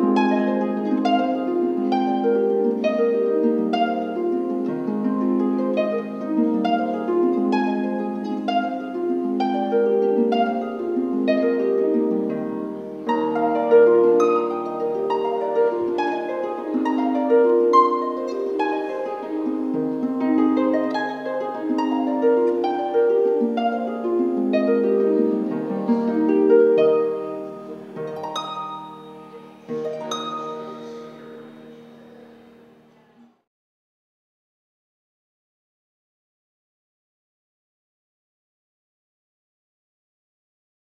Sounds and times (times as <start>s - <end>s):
Harp: 0.0s - 33.4s
Pizzicato: 0.0s - 33.5s.